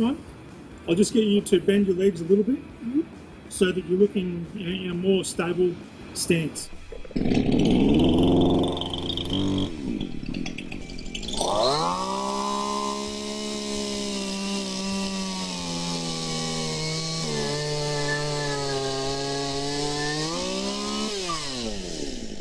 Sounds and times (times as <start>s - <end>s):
Sawing: 6.8s - 22.4s.